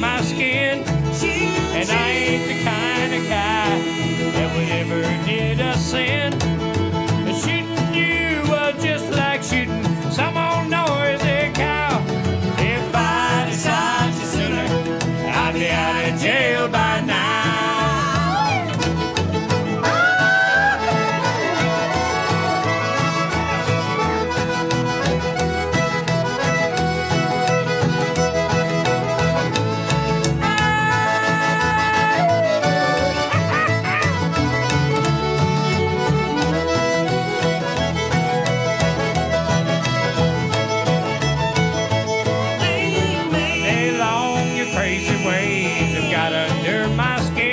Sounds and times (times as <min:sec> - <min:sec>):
Singing: 0:00.0 - 0:06.2, 0:12.6 - 0:18.6, 0:42.6 - 0:47.5
Bluegrass: 0:00.0 - 0:47.5
Bowed string instrument: 0:00.0 - 0:47.5
Guitar: 0:00.0 - 0:47.5.